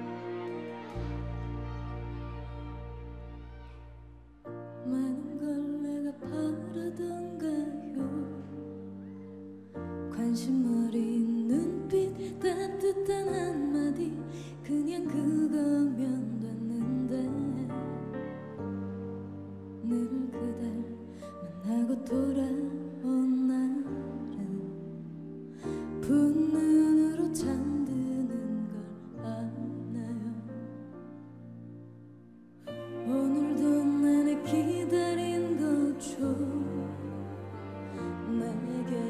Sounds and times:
Sad music: 0.0s - 39.0s.

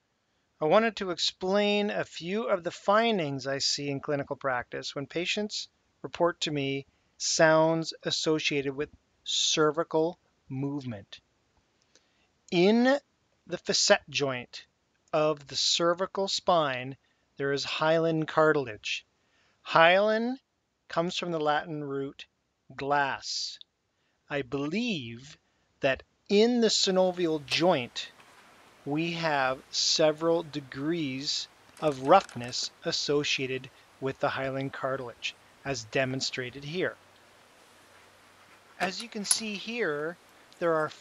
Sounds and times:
Speech: 0.6s - 11.2s, 12.5s - 19.0s, 19.7s - 23.6s, 24.3s - 28.1s, 28.9s - 37.0s, 38.8s - 41.0s.

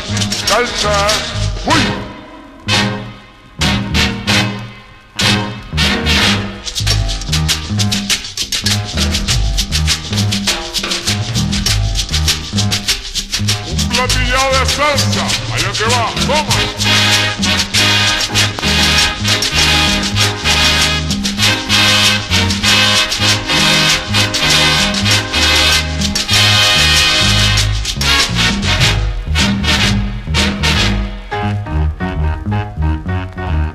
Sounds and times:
Swing music: 0.0s - 33.7s.

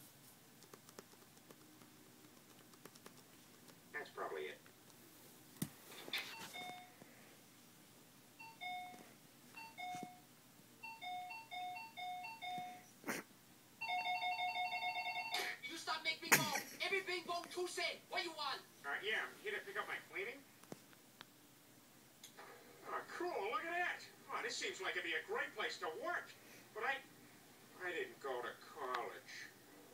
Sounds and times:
Inside, small room: 0.0s - 29.9s
Speech: 4.0s - 4.6s, 15.6s - 20.5s, 22.9s - 27.1s, 27.8s - 29.6s
Doorbell: 8.4s - 10.2s, 10.8s - 12.8s, 13.8s - 15.5s.

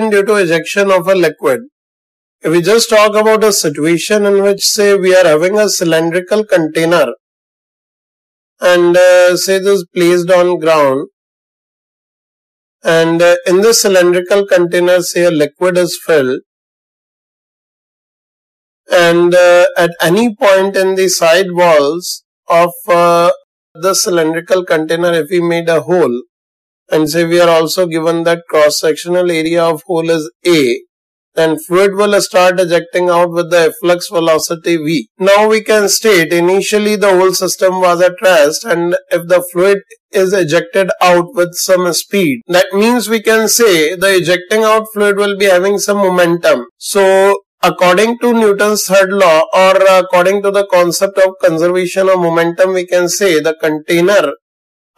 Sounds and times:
Speech: 0.0s - 1.7s, 2.4s - 7.2s, 8.6s - 11.1s, 12.8s - 16.5s, 18.9s - 26.2s, 26.9s - 30.8s, 31.4s - 54.4s.

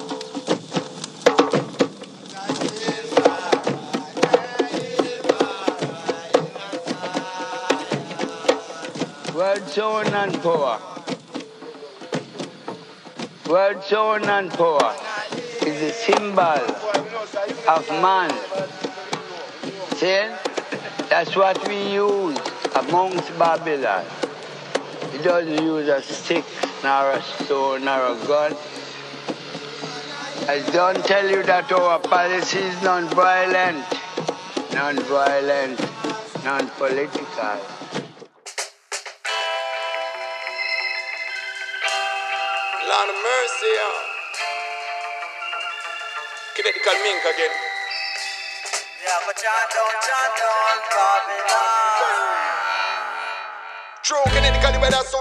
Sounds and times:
Music: 0.0s - 55.2s
Speech: 9.3s - 11.0s, 13.5s - 24.2s, 25.2s - 28.6s, 30.4s - 34.1s, 34.8s - 37.7s, 42.8s - 44.1s, 46.6s - 47.7s.

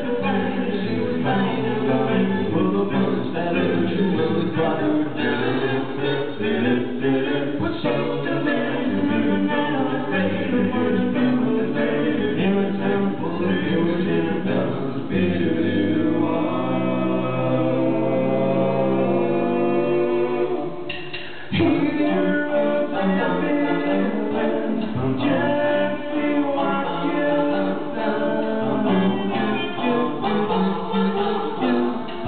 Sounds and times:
A capella: 0.0s - 32.2s.

